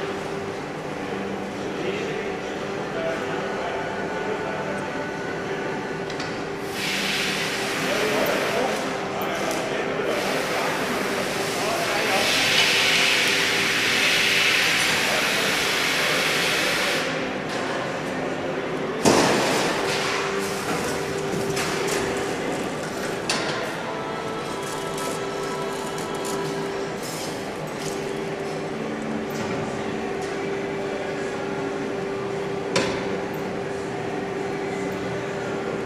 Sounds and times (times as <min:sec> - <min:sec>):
Speech: 0:01.6 - 0:05.9, 0:07.8 - 0:13.4, 0:14.5 - 0:18.9.